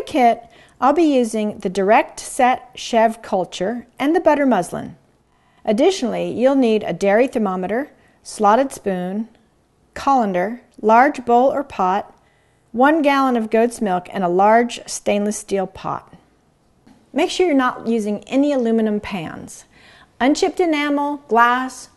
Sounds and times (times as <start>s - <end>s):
Speech: 0.0s - 5.0s, 5.7s - 9.4s, 10.0s - 12.2s, 12.8s - 16.2s, 17.1s - 21.9s.